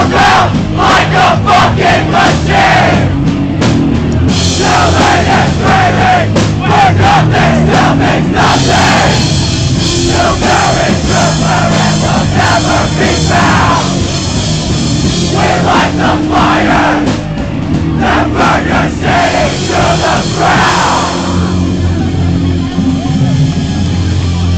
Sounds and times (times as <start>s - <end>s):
Music: 0.0s - 24.5s.